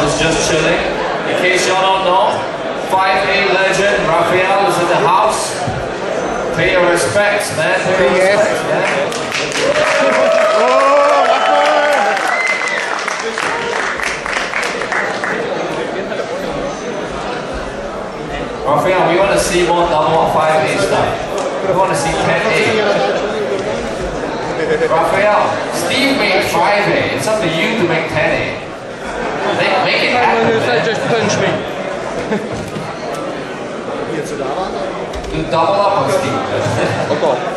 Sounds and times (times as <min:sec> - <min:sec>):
Inside, public space: 0:00.0 - 0:37.5.